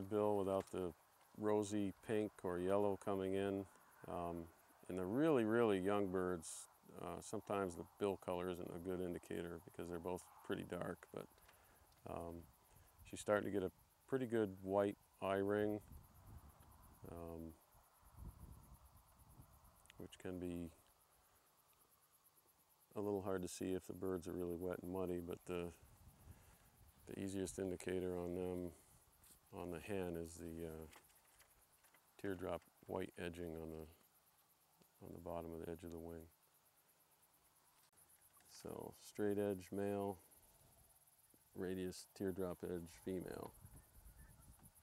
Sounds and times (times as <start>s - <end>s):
Speech: 0.0s - 11.3s, 12.0s - 12.4s, 13.0s - 15.8s, 17.1s - 17.6s, 19.9s - 20.8s, 23.0s - 25.8s, 27.1s - 28.8s, 29.5s - 30.9s, 32.2s - 34.0s, 35.0s - 36.3s, 38.4s - 40.2s, 41.5s - 43.5s.